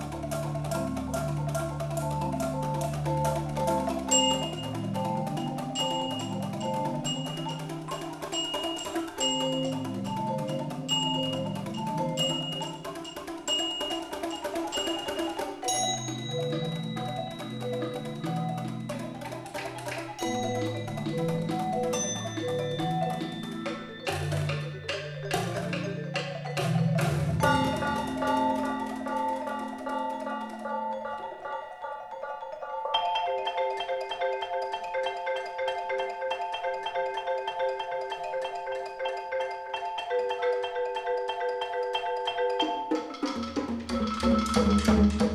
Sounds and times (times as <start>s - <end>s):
Drum: 0.0s - 30.9s, 43.0s - 45.3s.